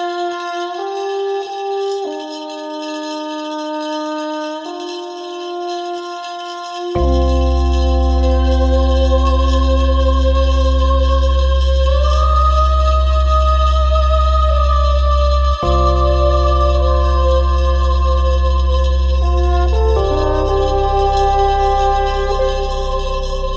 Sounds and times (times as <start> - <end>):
Music: 0.0 - 23.5.